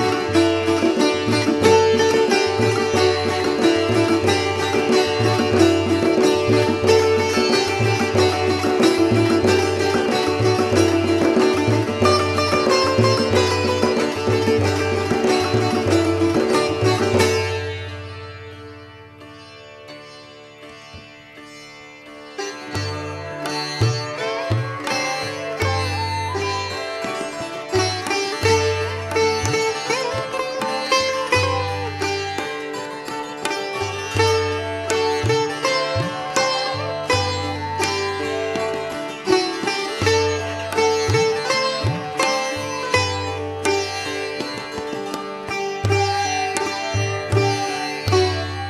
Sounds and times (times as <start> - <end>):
Sitar: 0.0 - 48.6.